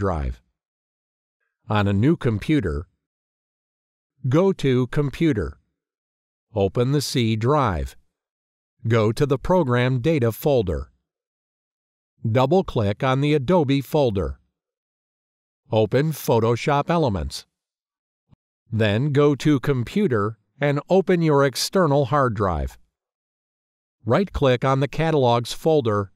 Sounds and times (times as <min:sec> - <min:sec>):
Speech: 0:00.0 - 0:00.5, 0:01.7 - 0:02.9, 0:04.2 - 0:05.6, 0:06.6 - 0:08.0, 0:08.8 - 0:10.9, 0:12.3 - 0:14.4, 0:15.7 - 0:17.5, 0:18.7 - 0:22.8, 0:24.0 - 0:26.1.